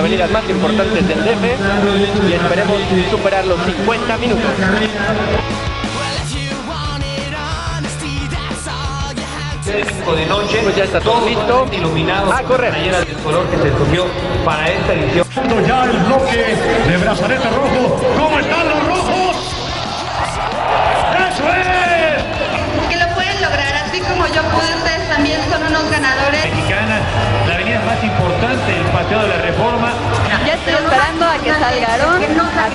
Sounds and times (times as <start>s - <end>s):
Music: 0.0s - 32.7s.